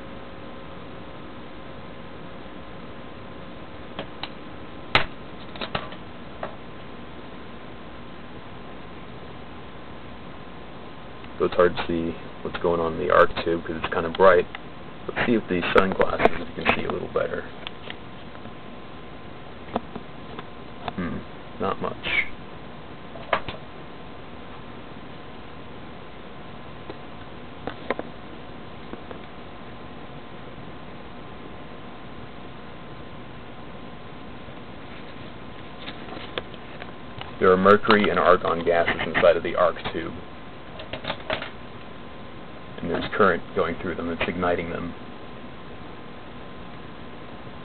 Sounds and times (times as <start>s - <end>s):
Speech: 11.4s - 14.5s, 15.1s - 17.6s, 20.9s - 22.3s, 37.4s - 40.2s, 42.8s - 45.0s.